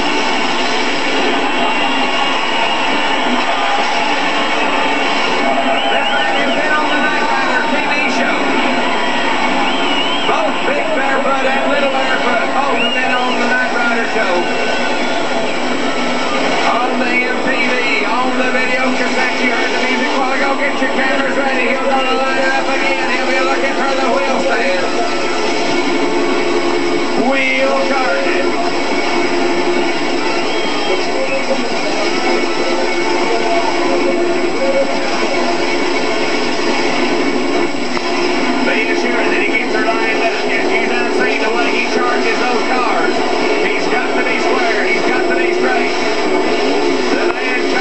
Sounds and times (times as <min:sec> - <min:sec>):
Speech: 0:05.9 - 0:08.5, 0:10.3 - 0:14.7, 0:16.6 - 0:25.1, 0:27.2 - 0:28.6, 0:38.7 - 0:46.0, 0:47.1 - 0:47.8.